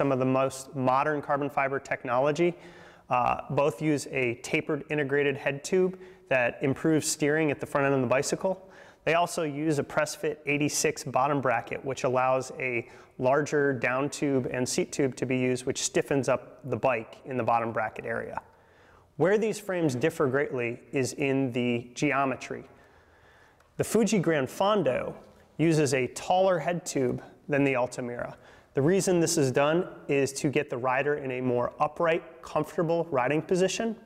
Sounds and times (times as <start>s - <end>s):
Speech: 0.0s - 18.5s, 19.2s - 22.7s, 23.8s - 34.0s.